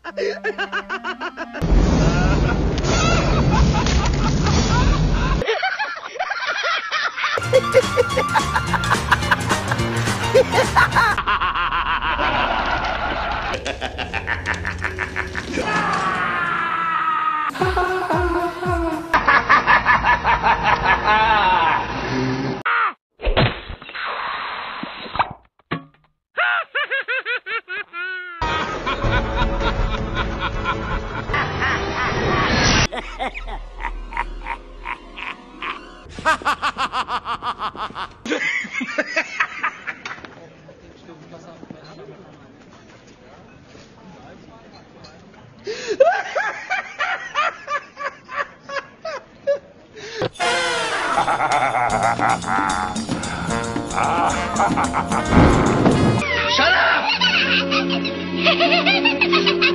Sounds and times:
Laughter: 0.0s - 15.6s, 19.1s - 22.0s, 26.4s - 40.4s, 45.8s - 49.7s, 50.9s - 55.4s, 56.2s - 59.7s
Music: 7.4s - 11.2s, 17.5s - 19.2s, 28.6s - 31.7s, 50.4s - 59.7s.

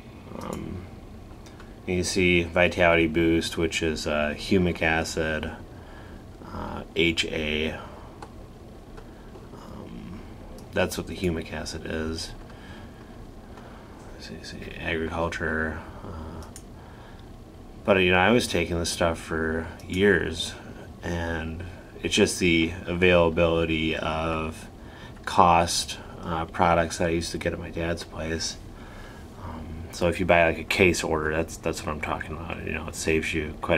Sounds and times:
Speech: 0.3s - 0.9s, 1.9s - 5.6s, 6.4s - 8.0s, 9.6s - 12.4s, 14.1s - 16.5s, 17.8s - 28.6s, 29.4s - 33.7s.

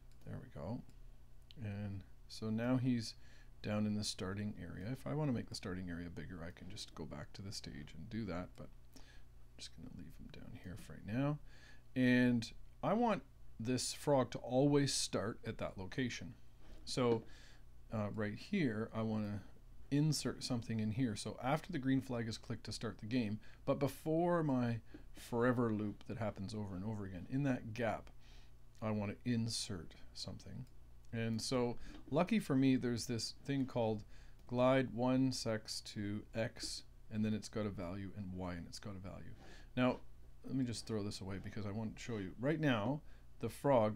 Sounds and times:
Speech: 0.2s - 0.9s, 1.5s - 8.8s, 9.6s - 11.4s, 12.0s - 17.3s, 17.9s - 28.2s, 28.8s - 43.9s.

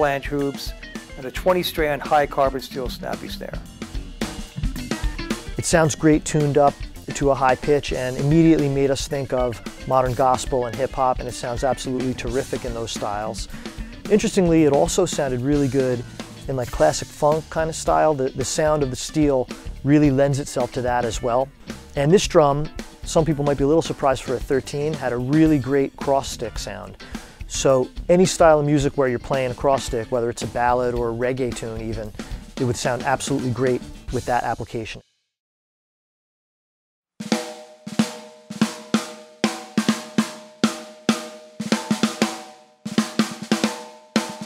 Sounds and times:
Speech: 0.0s - 3.6s, 5.6s - 13.5s, 14.1s - 35.0s
Bass drum: 0.0s - 34.2s, 37.3s - 44.4s.

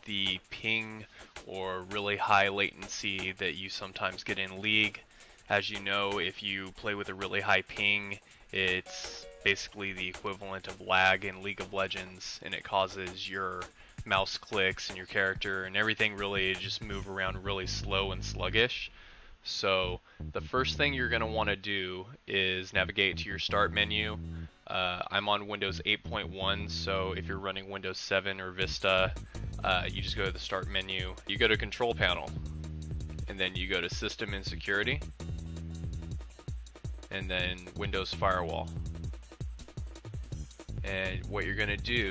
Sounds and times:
Music: 0.0s - 18.7s, 19.8s - 21.6s, 22.7s - 27.6s, 28.6s - 42.1s
Speech: 0.0s - 32.4s, 33.3s - 35.0s, 37.1s - 38.8s, 40.8s - 42.1s.

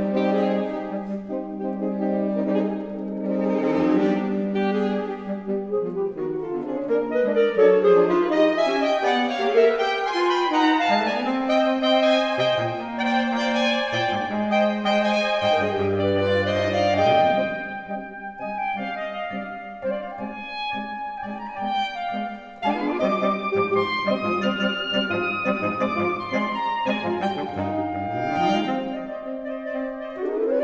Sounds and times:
Cello: 0.0s - 30.6s.

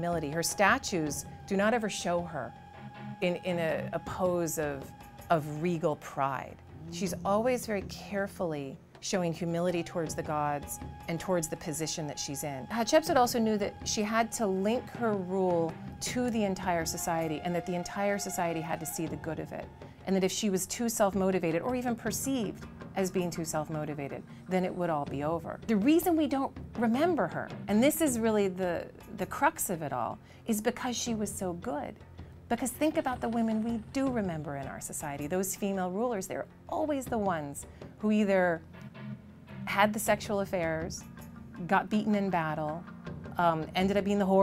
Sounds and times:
Female speech, woman speaking: 0.0s - 2.5s, 3.2s - 38.6s, 39.7s - 41.0s, 41.6s - 42.8s, 43.4s - 44.4s
Music: 0.0s - 44.4s.

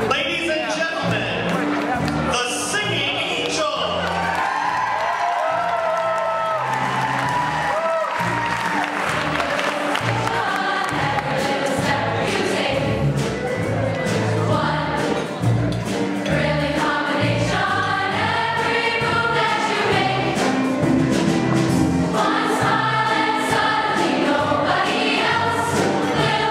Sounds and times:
Speech: 0.0s - 4.0s
Music: 0.0s - 26.5s.

